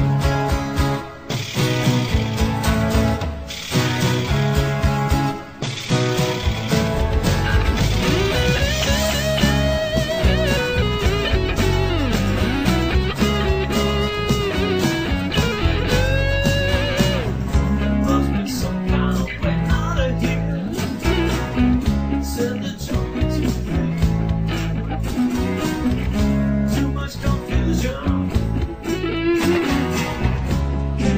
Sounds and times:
Music: 0:00.0 - 0:31.1.

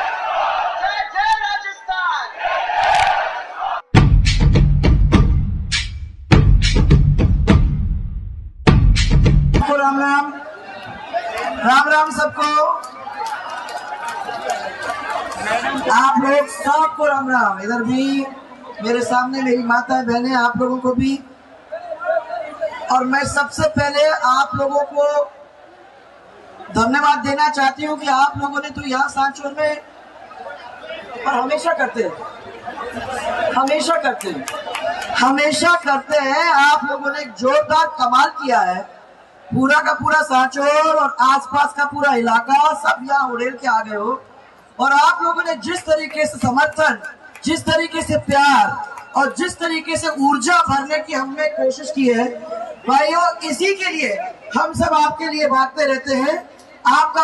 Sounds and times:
Female speech, woman speaking: 0:09.6 - 0:10.4, 0:15.9 - 0:21.2, 0:22.9 - 0:25.2, 0:26.8 - 0:29.8, 0:31.3 - 0:32.2, 0:33.6 - 0:34.4, 0:35.2 - 0:38.9, 0:39.6 - 0:44.2, 0:44.8 - 0:57.2
Conversation: 0:09.6 - 0:57.2.

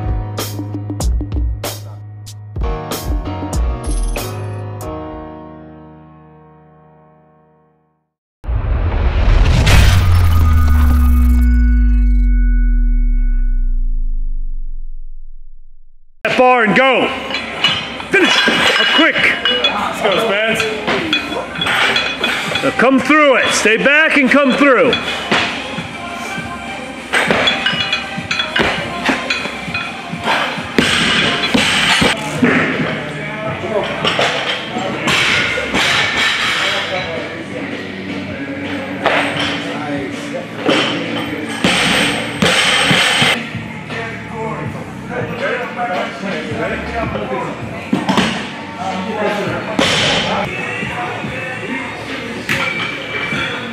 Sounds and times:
Music: 0:00.0 - 0:14.8, 0:16.2 - 0:53.7
Speech: 0:22.6 - 0:25.0.

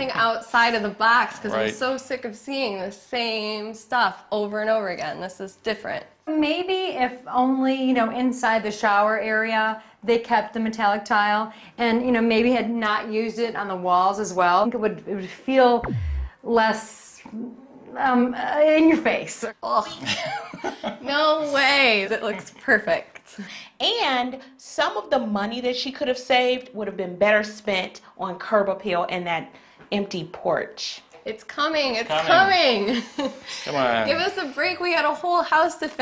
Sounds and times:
Female speech, woman speaking: 0:00.0 - 0:15.9, 0:16.5 - 0:20.3, 0:21.0 - 0:36.0
Conversation: 0:00.0 - 0:36.0.

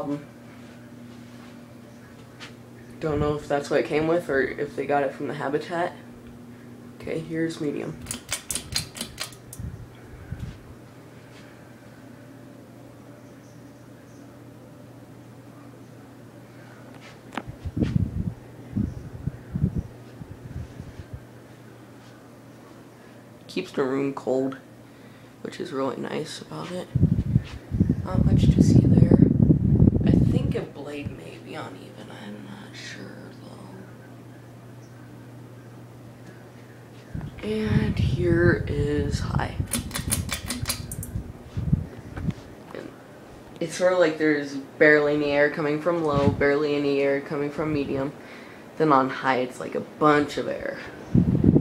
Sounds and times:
Speech: 0:00.0 - 0:00.3, 0:03.0 - 0:06.0, 0:07.0 - 0:08.0, 0:23.5 - 0:24.7, 0:25.4 - 0:27.0, 0:28.0 - 0:29.3, 0:30.1 - 0:34.0, 0:37.4 - 0:39.7, 0:43.6 - 0:48.2, 0:48.8 - 0:50.9.

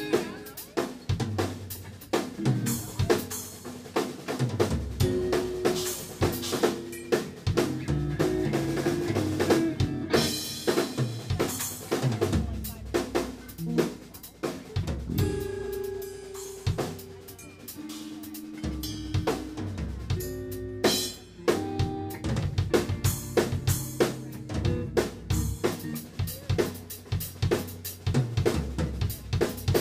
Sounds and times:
Drum kit: 0:00.0 - 0:29.8
Bass drum: 0:07.5 - 0:10.3, 0:14.8 - 0:16.0, 0:21.8 - 0:29.8.

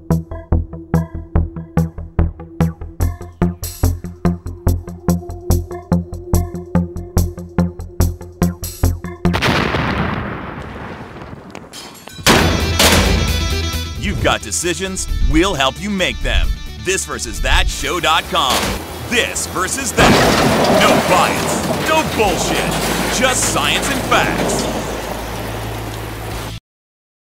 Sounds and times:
Music: 0:00.0 - 0:09.4, 0:12.1 - 0:20.3
Speech: 0:14.0 - 0:24.8.

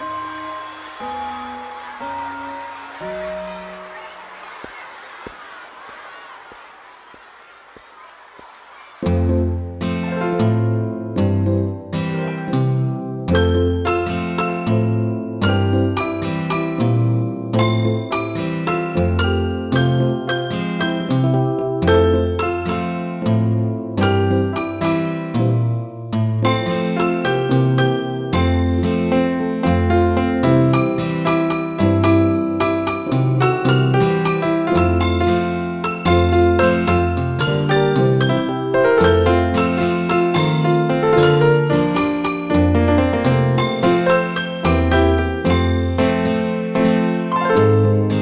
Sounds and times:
Music: 0:00.0 - 0:05.2, 0:08.9 - 0:48.2.

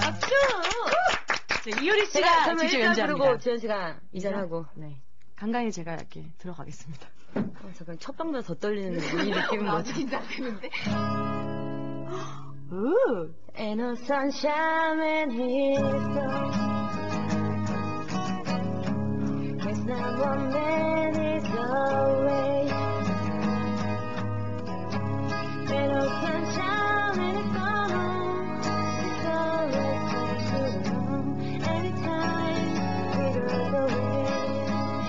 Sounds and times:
Music: 0:10.7 - 0:12.8, 0:14.6 - 0:35.0.

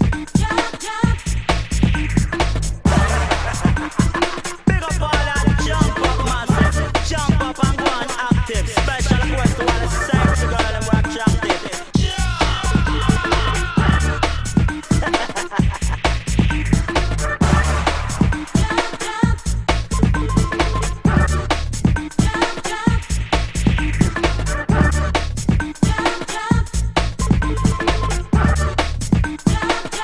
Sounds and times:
Electronic music: 0:00.0 - 0:30.0.

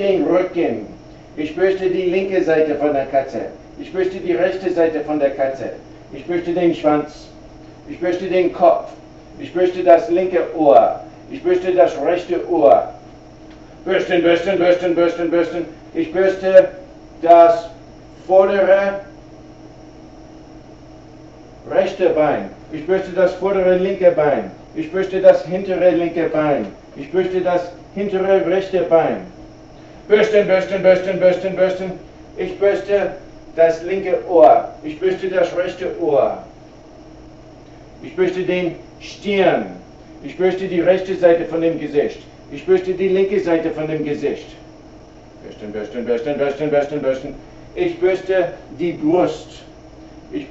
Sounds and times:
Speech: 0:00.0 - 0:13.0, 0:13.8 - 0:19.2, 0:21.6 - 0:29.4, 0:30.1 - 0:36.5, 0:38.0 - 0:44.7, 0:45.4 - 0:50.5.

